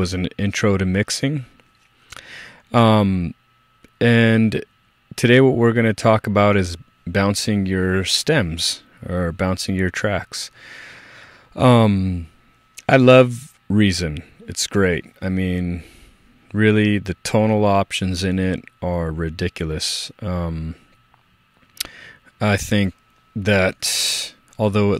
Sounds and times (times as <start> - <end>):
Speech: 0.0 - 1.6, 2.7 - 10.6, 11.6 - 15.9, 16.5 - 20.8, 22.4 - 24.9.